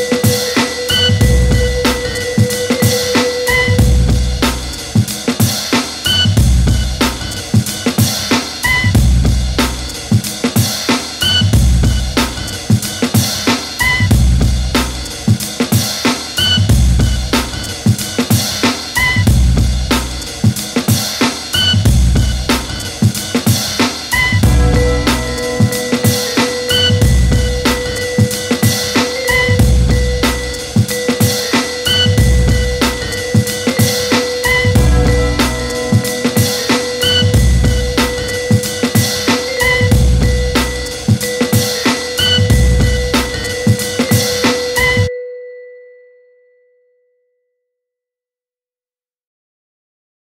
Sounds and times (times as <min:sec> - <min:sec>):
Glockenspiel: 0:00.0 - 0:05.0, 0:24.2 - 0:47.4.